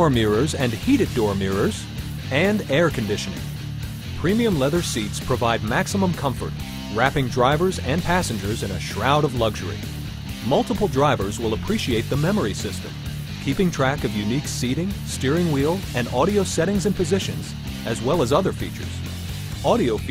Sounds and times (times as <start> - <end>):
Speech: 0.0 - 3.4, 4.2 - 9.8, 10.4 - 19.0, 19.6 - 20.1
Music: 0.0 - 20.1.